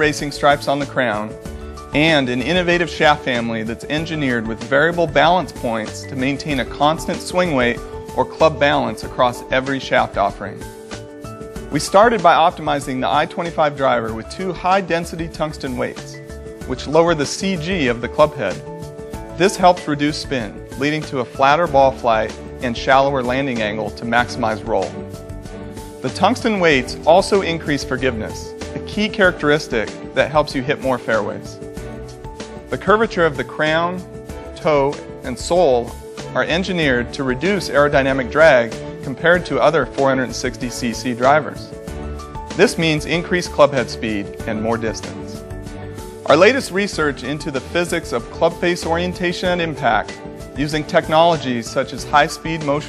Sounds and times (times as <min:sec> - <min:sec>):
Speech: 0:00.0 - 0:01.4, 0:02.0 - 0:10.7, 0:11.7 - 0:18.6, 0:19.4 - 0:25.0, 0:26.0 - 0:31.6, 0:32.7 - 0:34.0, 0:34.6 - 0:41.8, 0:42.6 - 0:45.4, 0:46.3 - 0:52.8
Music: 0:00.0 - 0:52.8.